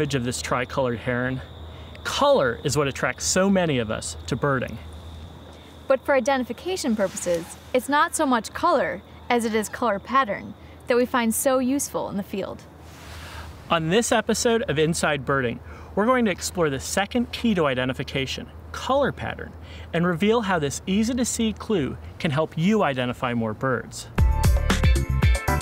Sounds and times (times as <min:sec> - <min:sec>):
Speech: 0:13.7 - 0:24.2.